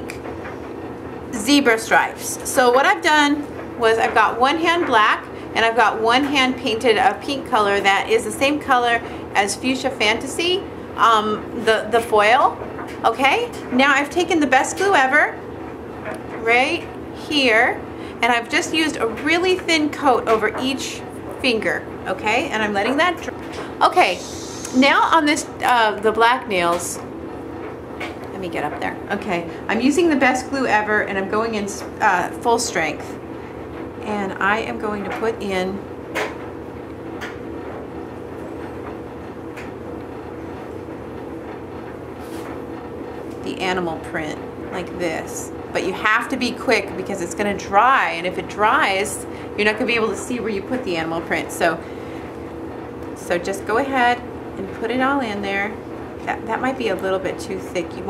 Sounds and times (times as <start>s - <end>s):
Speech: 1.3s - 15.4s, 16.4s - 27.0s, 28.3s - 33.2s, 34.0s - 35.8s, 43.4s - 51.8s, 53.2s - 58.0s.